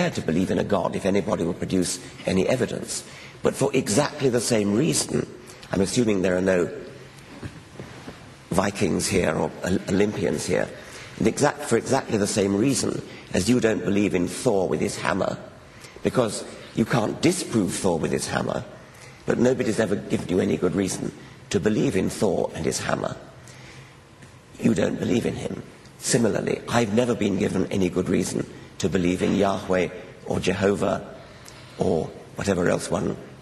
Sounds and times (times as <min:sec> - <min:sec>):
Narration, monologue: 0:00.0 - 0:33.4.